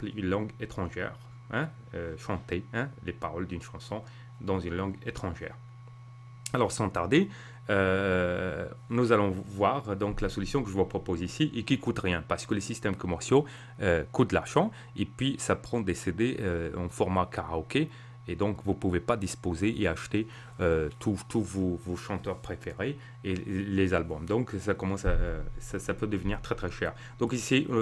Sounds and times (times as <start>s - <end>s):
Speech: 0.0s - 5.7s, 6.5s - 27.8s.